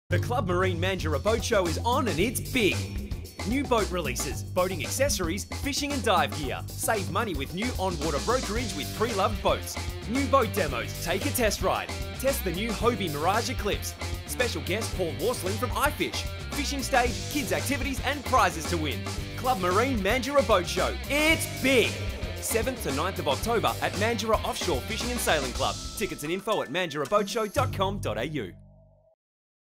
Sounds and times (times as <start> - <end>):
Speech: 0.1 - 28.6
Music: 0.1 - 29.2.